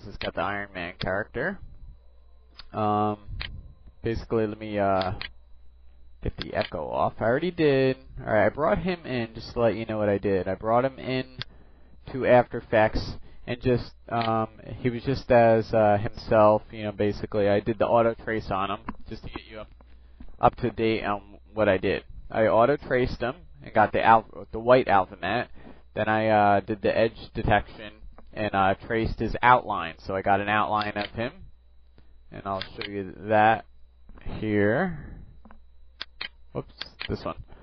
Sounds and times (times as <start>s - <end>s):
Speech: 0.0s - 1.7s, 2.7s - 3.4s, 4.0s - 5.3s, 6.2s - 19.7s, 20.4s - 31.5s, 32.3s - 35.2s, 36.6s - 37.5s.